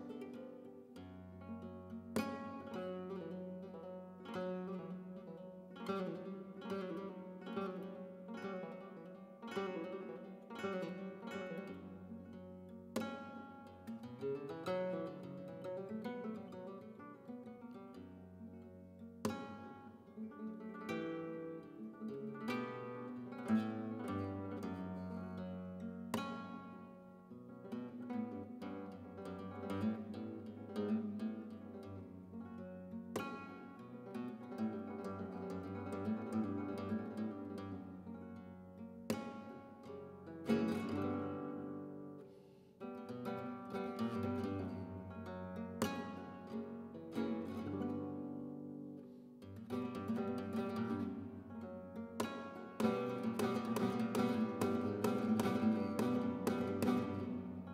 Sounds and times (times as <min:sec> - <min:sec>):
Guitar: 0:00.0 - 0:57.7.